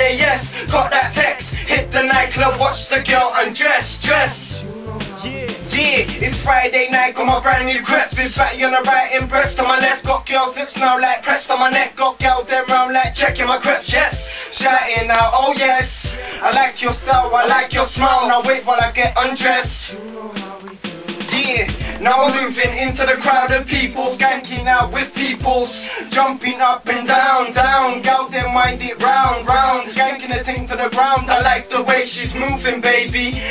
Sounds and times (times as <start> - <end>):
Music: 0.0 - 33.5.